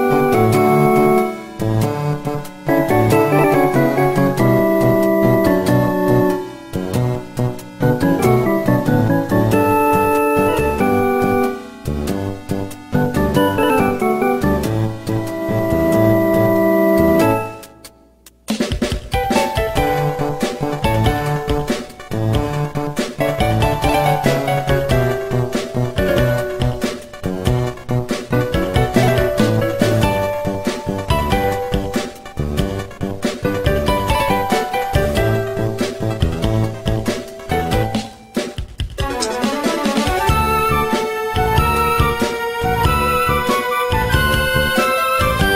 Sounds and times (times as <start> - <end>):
Music: 0.0 - 45.5.